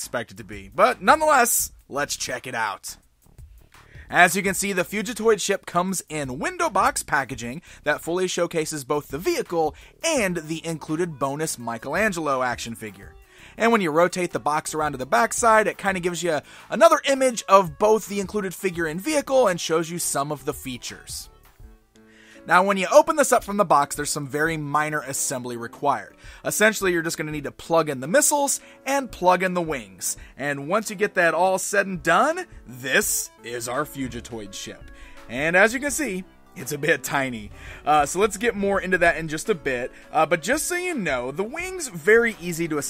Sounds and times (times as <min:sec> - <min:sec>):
Speech: 0:00.0 - 0:03.0, 0:04.1 - 0:21.3, 0:22.5 - 0:42.9
Music: 0:00.0 - 0:42.9.